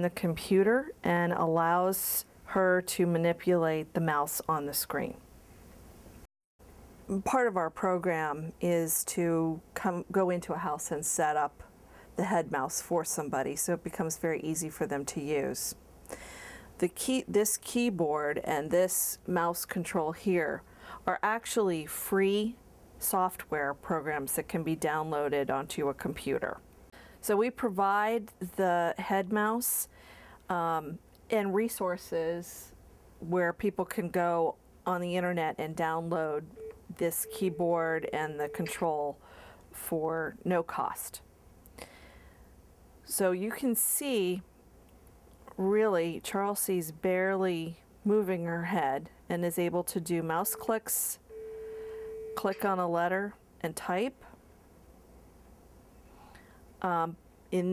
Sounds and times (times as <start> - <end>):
Speech: 0.0 - 5.2, 7.1 - 15.8, 16.8 - 26.6, 27.2 - 29.9, 30.5 - 39.2, 39.8 - 41.2, 43.1 - 44.5, 45.5 - 51.2, 52.4 - 54.4, 56.8 - 57.7.